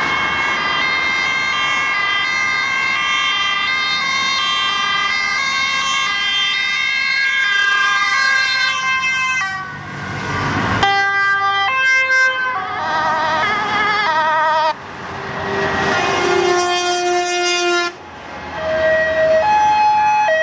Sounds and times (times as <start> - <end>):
Air horn, truck horn: 0.0 - 5.2, 7.4 - 9.7, 10.8 - 14.8, 15.8 - 18.0.